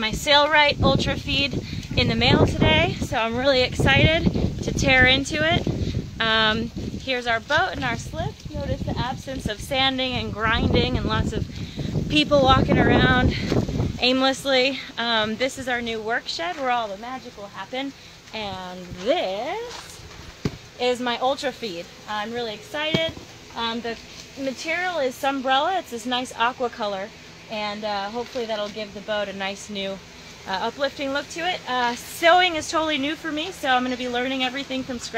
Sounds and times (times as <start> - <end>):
Speech: 0.0 - 11.5, 12.1 - 20.0, 20.8 - 35.1.